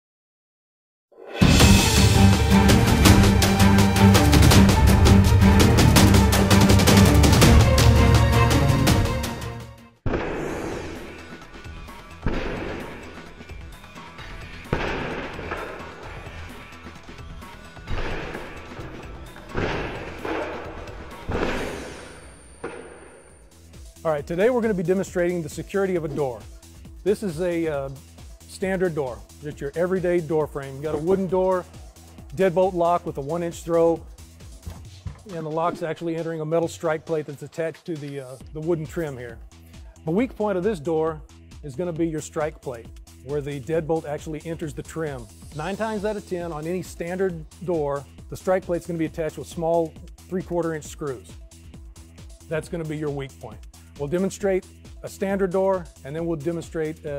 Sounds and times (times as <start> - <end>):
Music: 1.1 - 57.1.